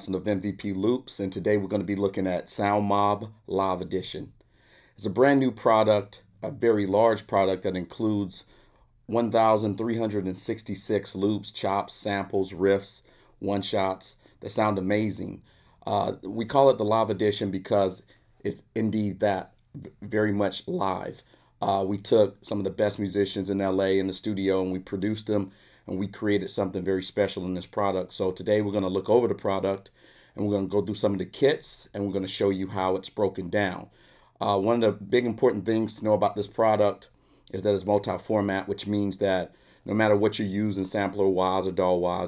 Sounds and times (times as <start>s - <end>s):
Speech: 0.0s - 4.4s, 5.0s - 8.5s, 9.1s - 42.2s.